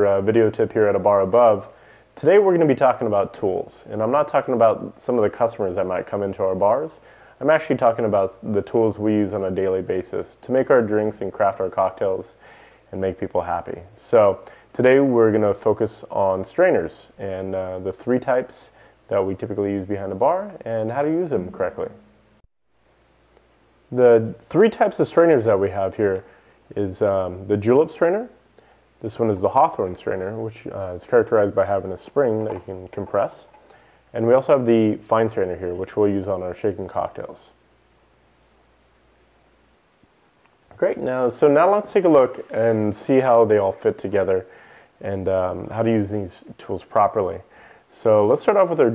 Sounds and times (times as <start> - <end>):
Speech: 0.0 - 22.1, 23.9 - 28.4, 29.0 - 37.6, 40.7 - 48.9.